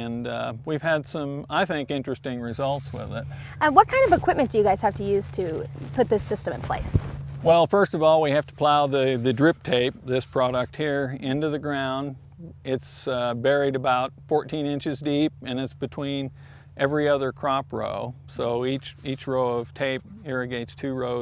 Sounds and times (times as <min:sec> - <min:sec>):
Speech: 0:00.0 - 0:21.2.